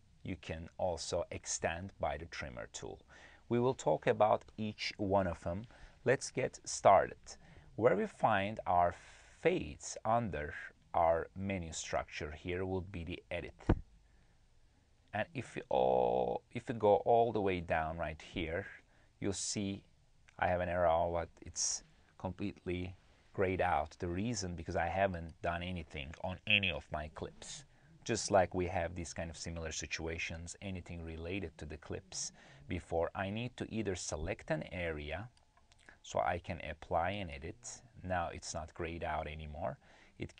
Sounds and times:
Speech: 0.0s - 13.8s, 15.1s - 40.3s.

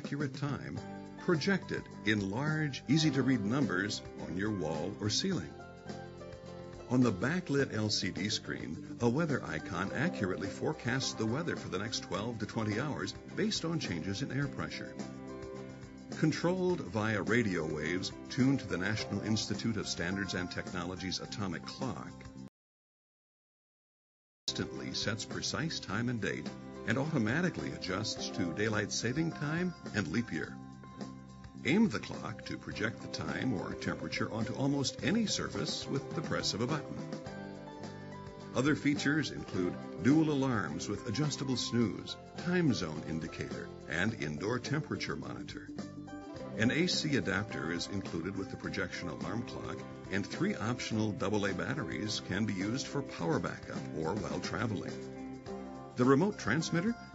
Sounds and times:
Speech: 0.0s - 5.6s, 6.9s - 15.0s, 16.1s - 22.2s, 24.5s - 30.6s, 31.6s - 37.1s, 38.6s - 45.8s, 46.6s - 55.0s, 56.0s - 57.0s
Music: 0.0s - 22.5s, 24.5s - 57.1s.

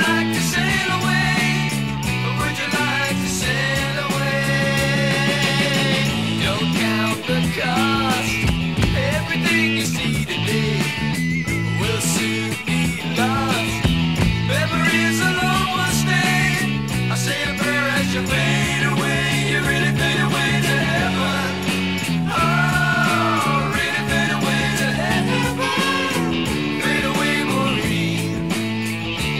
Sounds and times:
Music: 0.0s - 29.3s.

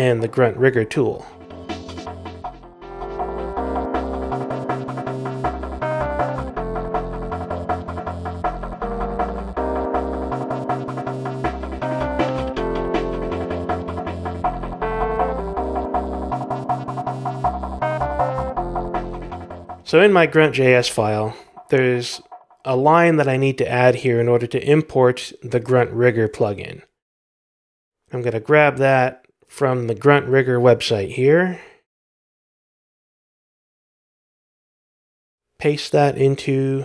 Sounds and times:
Speech: 0.0s - 1.3s, 19.9s - 26.9s, 28.1s - 31.8s, 35.6s - 36.8s
Music: 0.0s - 22.8s.

